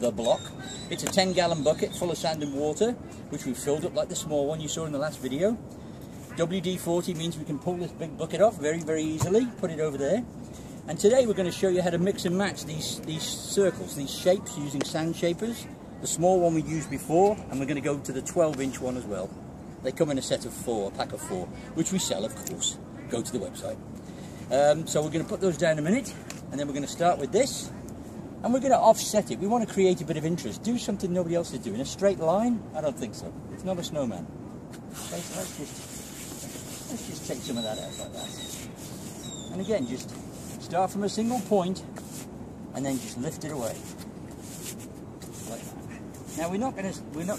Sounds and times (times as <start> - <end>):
Speech: 0.0 - 5.6, 6.4 - 10.3, 10.9 - 23.8, 24.5 - 27.8, 28.4 - 34.3, 35.0 - 35.8, 36.8 - 38.4, 39.5 - 41.9, 42.7 - 43.9, 45.4 - 47.3.